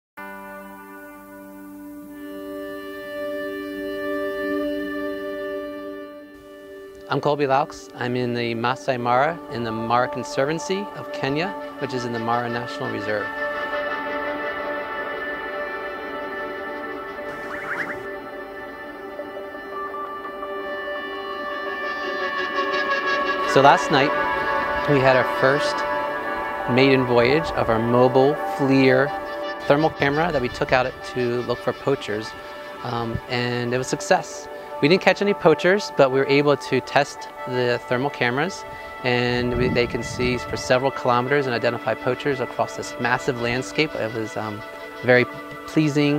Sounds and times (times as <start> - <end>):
Speech: 7.1 - 13.3, 23.5 - 24.1, 24.8 - 25.8, 26.7 - 46.1.